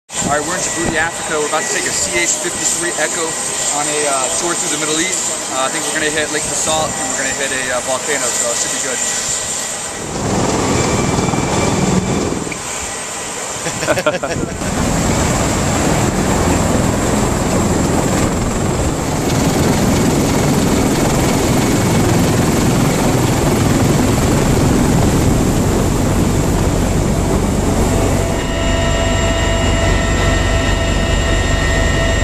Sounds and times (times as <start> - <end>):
Jet engine: 0.1 - 32.2
Speech: 0.2 - 9.1.